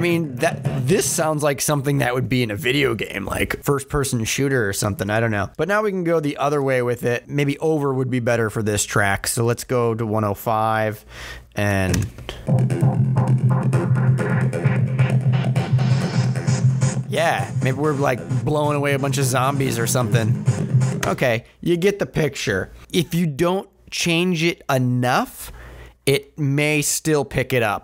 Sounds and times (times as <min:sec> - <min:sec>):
Speech: 0:00.0 - 0:12.1, 0:17.1 - 0:20.4, 0:21.0 - 0:27.8.